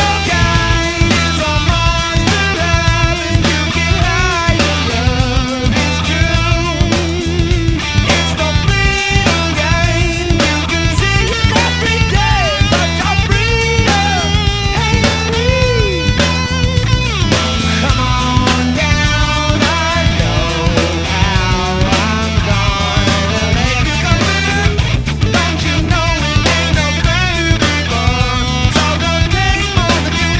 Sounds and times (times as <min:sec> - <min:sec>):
Progressive rock: 0:00.0 - 0:30.3.